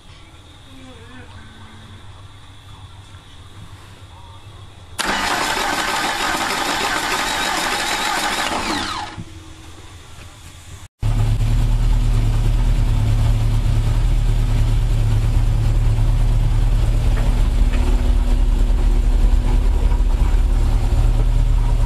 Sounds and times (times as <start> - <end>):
Medium engine (mid frequency): 5.0 - 9.3, 10.7 - 21.8.